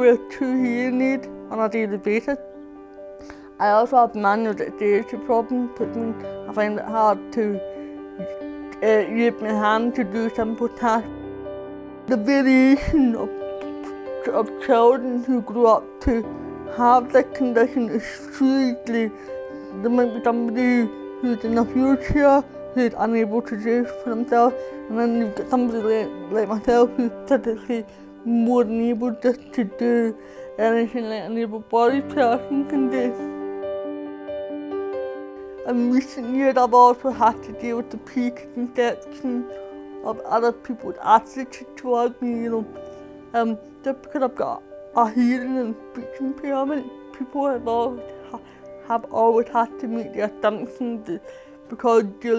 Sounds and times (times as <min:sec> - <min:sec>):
Speech: 0:00.0 - 0:02.4, 0:03.6 - 0:07.6, 0:08.2 - 0:11.1, 0:12.1 - 0:19.2, 0:19.8 - 0:33.3, 0:35.6 - 0:42.7, 0:43.4 - 0:52.3
Music: 0:00.0 - 0:52.3.